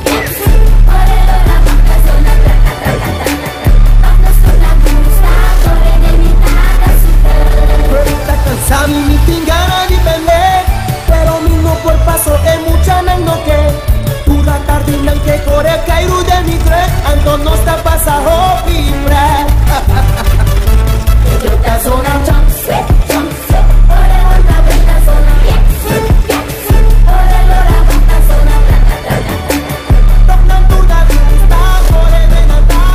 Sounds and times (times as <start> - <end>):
Music: 0.0 - 32.9.